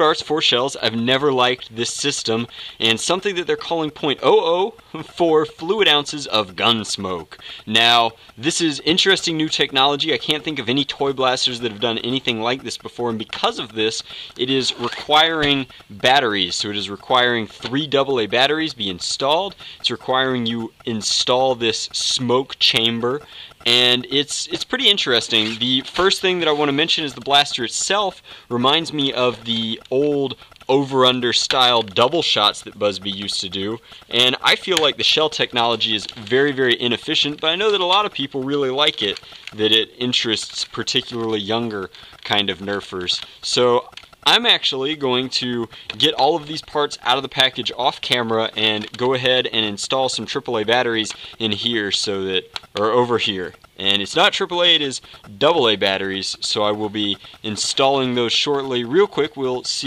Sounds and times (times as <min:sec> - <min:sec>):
Speech: 0:00.0 - 0:59.8.